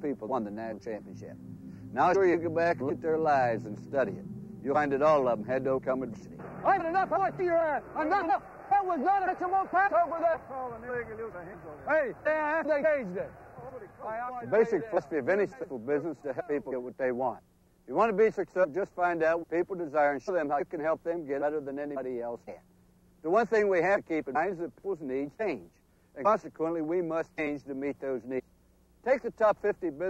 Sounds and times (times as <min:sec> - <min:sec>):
Speech: 0:00.0 - 0:01.4, 0:02.0 - 0:22.7, 0:23.3 - 0:28.4, 0:29.1 - 0:30.1.